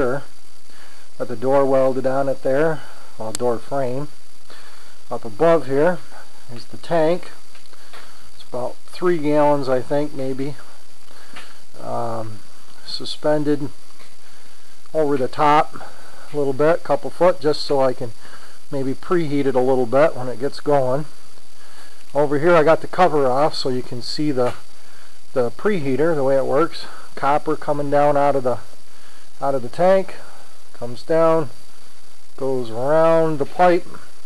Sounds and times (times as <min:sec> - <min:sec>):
Speech: 0:00.0 - 0:00.3, 0:01.2 - 0:04.2, 0:05.1 - 0:07.4, 0:08.4 - 0:10.7, 0:11.8 - 0:13.7, 0:14.9 - 0:21.1, 0:22.1 - 0:24.6, 0:25.4 - 0:28.7, 0:29.4 - 0:31.5, 0:32.4 - 0:34.0.